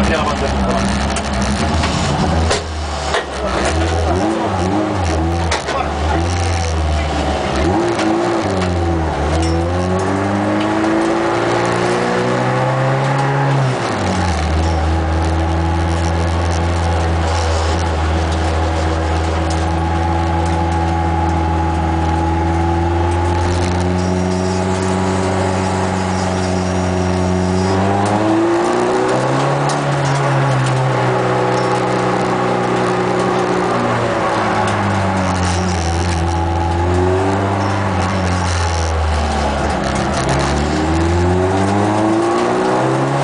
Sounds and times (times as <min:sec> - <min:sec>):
Car: 0:00.0 - 0:43.2.